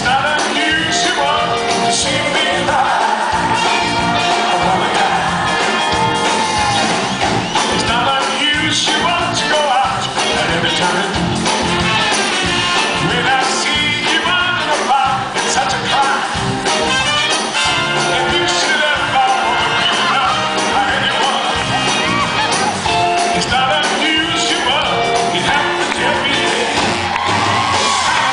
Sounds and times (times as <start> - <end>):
Exciting music: 0.0 - 28.3
Rhythm and blues: 0.0 - 28.3.